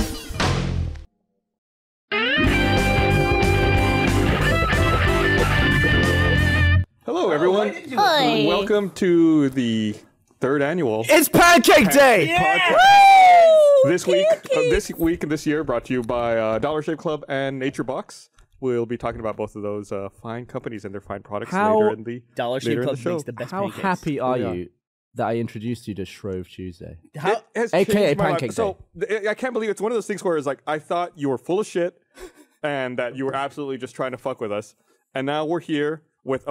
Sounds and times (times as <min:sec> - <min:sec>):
Speech: 0:07.1 - 0:12.8, 0:13.8 - 0:32.0, 0:32.6 - 0:36.5.